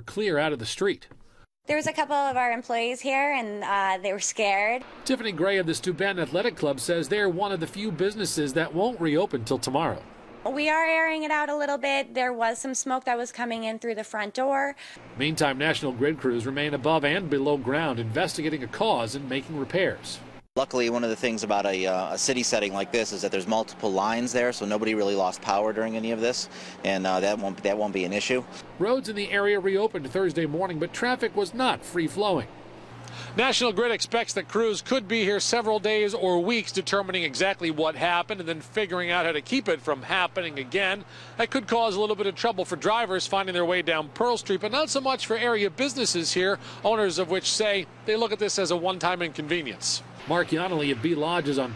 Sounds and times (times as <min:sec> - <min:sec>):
Speech: 0:01.7 - 0:32.5, 0:33.4 - 0:51.7.